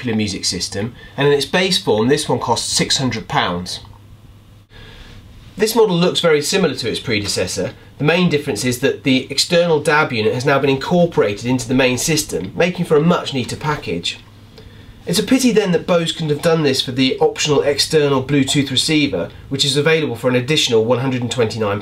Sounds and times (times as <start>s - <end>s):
Speech: 0.0s - 3.9s, 5.6s - 14.3s, 15.1s - 21.8s.